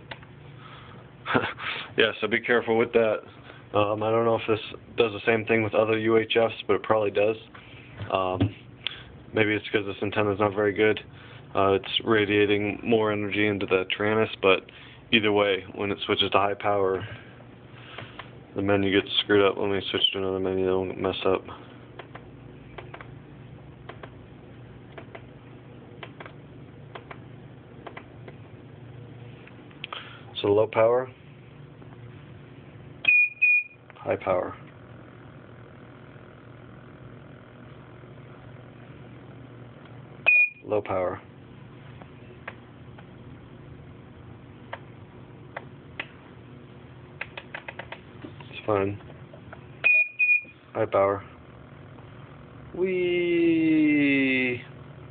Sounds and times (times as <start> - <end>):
Speech: 2.0 - 7.5, 8.1 - 8.5, 9.3 - 17.1, 18.6 - 21.6, 30.4 - 31.2, 34.0 - 34.7, 40.6 - 41.3, 48.4 - 49.0, 50.7 - 51.3, 52.7 - 54.7.